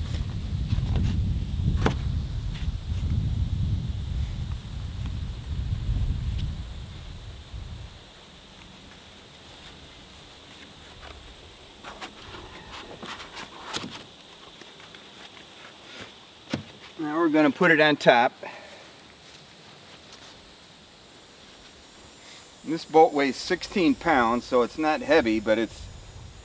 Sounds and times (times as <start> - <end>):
Speech: 17.0 - 18.6, 22.6 - 25.9.